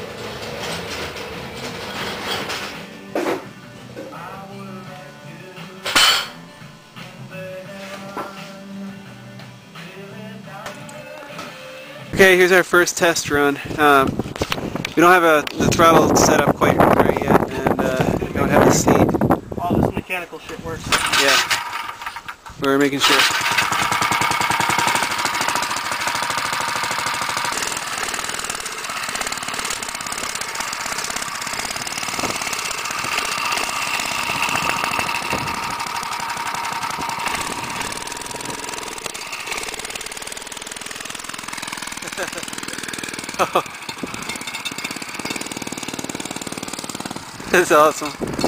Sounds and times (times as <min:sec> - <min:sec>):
Outside, rural or natural: 0:12.1 - 0:48.4
Speech: 0:12.2 - 0:14.1, 0:15.0 - 0:21.4, 0:22.6 - 0:23.3, 0:47.5 - 0:48.2
Motorcycle: 0:20.9 - 0:48.4.